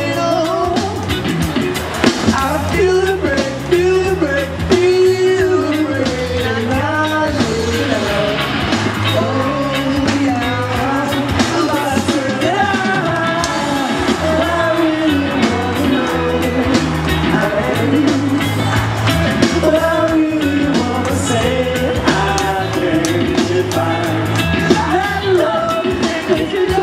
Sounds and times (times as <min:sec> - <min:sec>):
Guitar: 0:00.0 - 0:26.8.